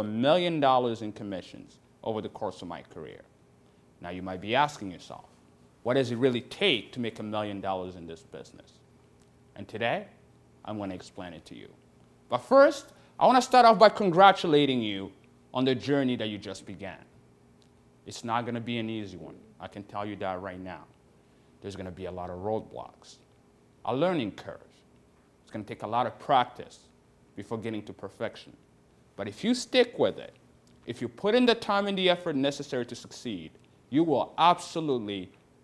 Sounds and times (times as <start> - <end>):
Speech: 0.0 - 3.3, 4.0 - 8.8, 9.5 - 17.2, 18.0 - 21.0, 21.6 - 24.9, 25.5 - 28.6, 29.2 - 35.4.